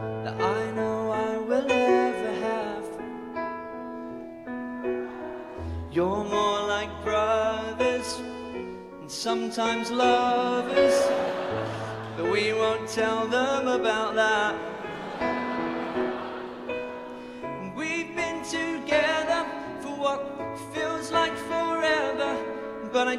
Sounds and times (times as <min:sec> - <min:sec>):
Music: 0:00.0 - 0:23.1.